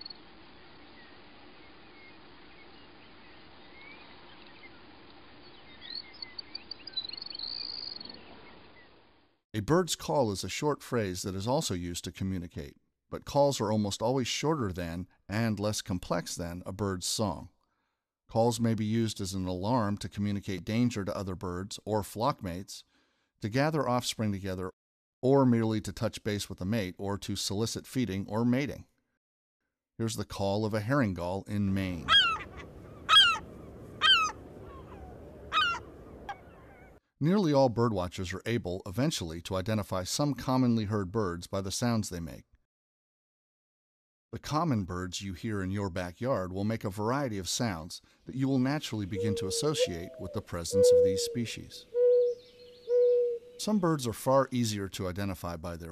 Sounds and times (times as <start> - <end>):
Chirp, tweet: 1.9 - 4.8, 5.4 - 8.9, 52.0 - 53.6.